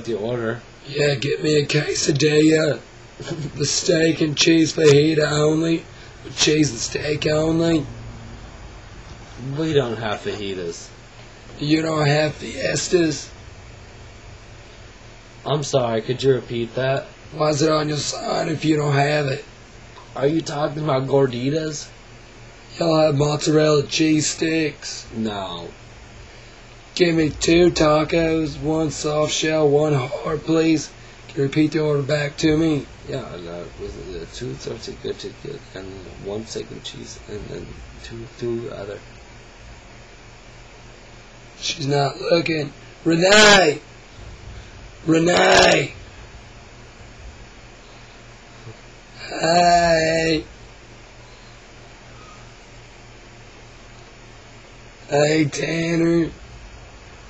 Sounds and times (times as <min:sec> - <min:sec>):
Speech: 0:00.0 - 0:07.9, 0:09.4 - 0:11.0, 0:11.6 - 0:13.3, 0:15.4 - 0:19.5, 0:20.2 - 0:22.0, 0:22.7 - 0:25.8, 0:27.0 - 0:39.0, 0:41.6 - 0:43.9, 0:45.0 - 0:46.0, 0:49.2 - 0:50.5, 0:55.1 - 0:56.4.